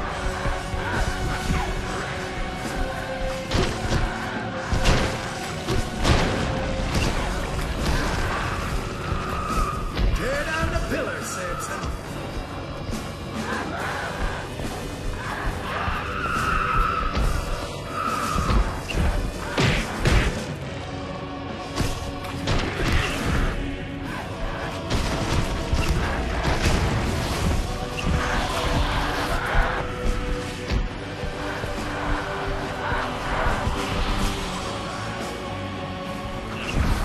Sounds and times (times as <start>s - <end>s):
Music: 0.0s - 37.0s
Speech: 10.2s - 11.9s.